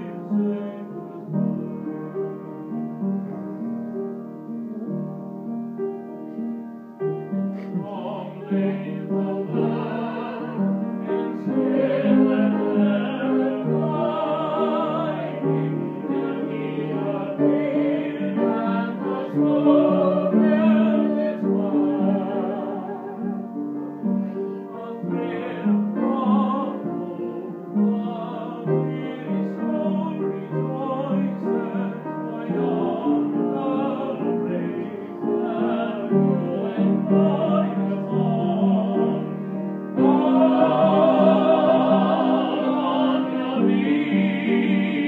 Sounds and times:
Male singing: 0.0s - 1.7s, 7.7s - 10.6s, 24.8s - 39.3s
Music: 0.0s - 45.0s.

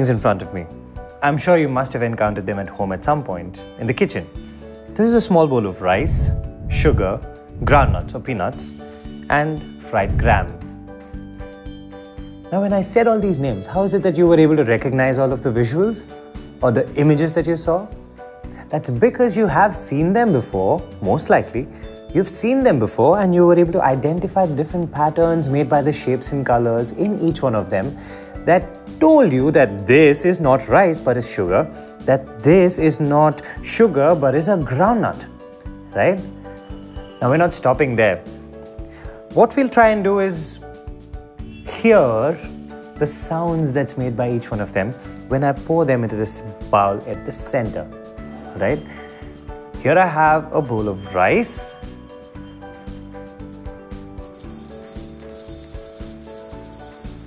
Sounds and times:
Speech: 0.0s - 4.3s, 5.0s - 10.6s, 12.5s - 17.9s, 18.7s - 35.3s, 36.0s - 36.3s, 37.2s - 38.3s, 39.4s - 40.6s, 41.7s - 48.9s, 49.8s - 51.8s
Music: 0.0s - 57.2s.

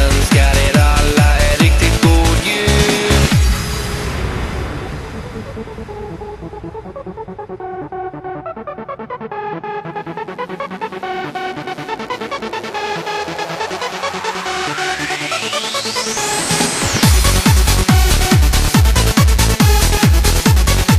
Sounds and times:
Techno: 0.0s - 20.9s.

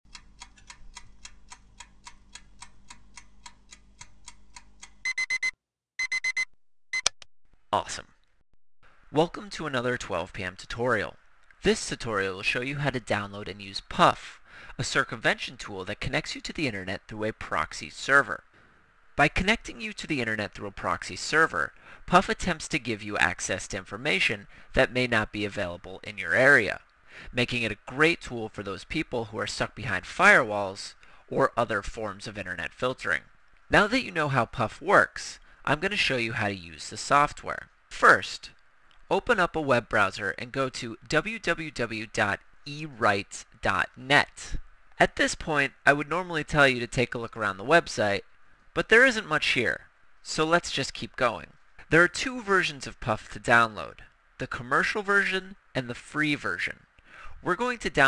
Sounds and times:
Speech: 7.7s - 8.2s, 9.1s - 18.4s, 19.2s - 56.8s, 57.4s - 58.0s.

